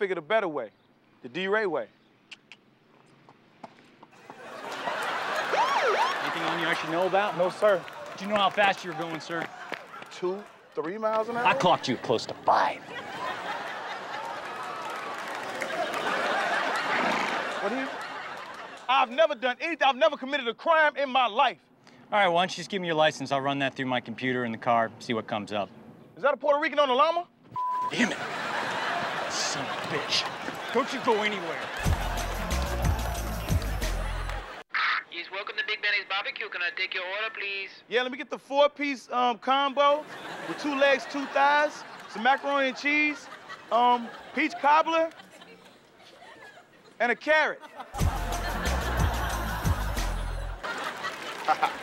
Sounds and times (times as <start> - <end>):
Speech: 6.2 - 9.5, 18.9 - 27.3, 29.3 - 31.7, 34.8 - 45.2, 47.0 - 47.6.